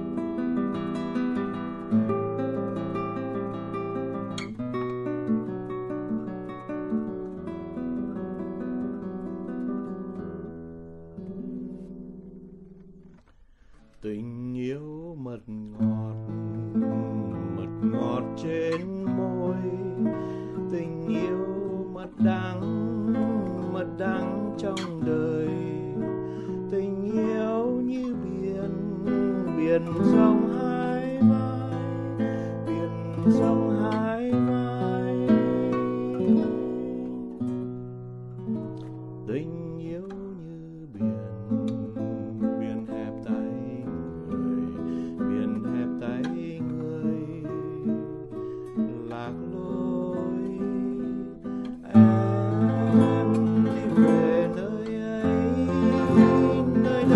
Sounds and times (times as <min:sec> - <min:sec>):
Acoustic guitar: 0:00.0 - 0:57.1
Strum: 0:00.0 - 0:57.1.